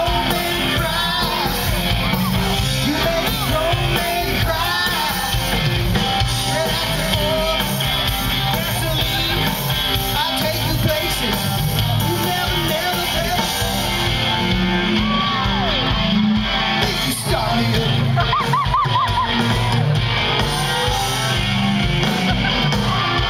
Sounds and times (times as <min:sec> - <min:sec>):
Male singing: 0:00.0 - 0:13.7, 0:16.8 - 0:18.2
Music: 0:00.0 - 0:23.3.